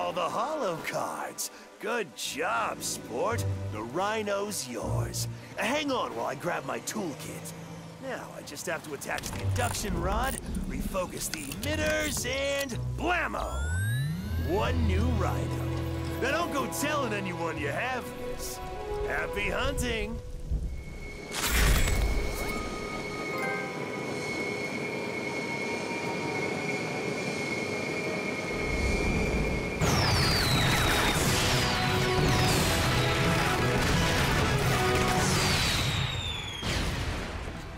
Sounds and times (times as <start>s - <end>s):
Music: 0.0s - 37.7s.